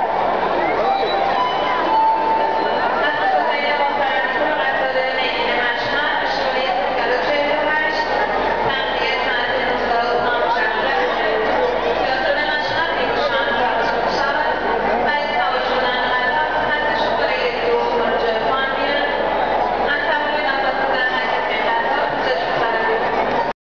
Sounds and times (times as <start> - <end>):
Speech: 0.0 - 23.6.